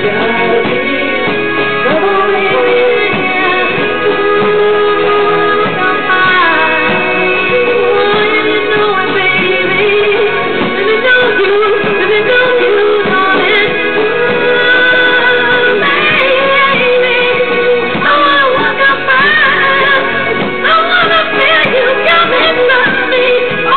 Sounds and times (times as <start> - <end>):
Music: 0.0 - 23.7.